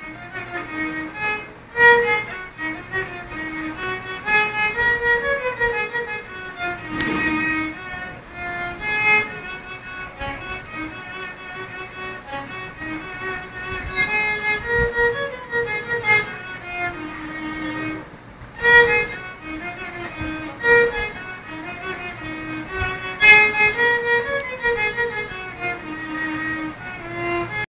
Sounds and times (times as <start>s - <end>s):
Violin, fiddle: 0.0s - 27.7s.